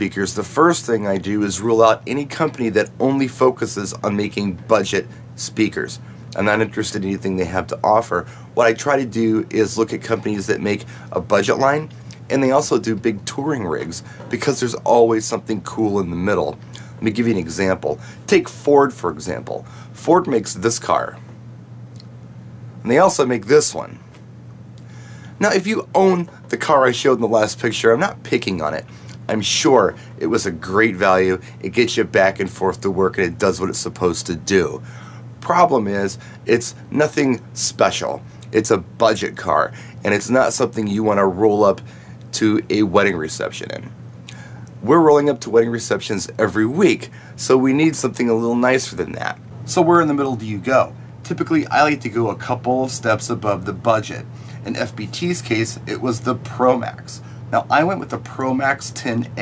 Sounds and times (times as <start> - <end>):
Speech: 0.0 - 21.2, 22.8 - 24.0, 25.4 - 34.8, 35.4 - 44.0, 44.8 - 59.4.